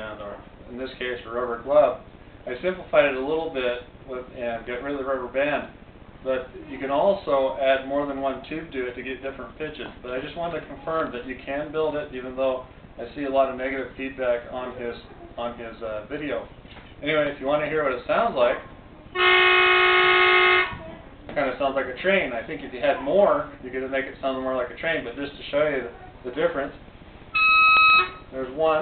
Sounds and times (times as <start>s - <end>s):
Train horn: 19.2s - 20.8s.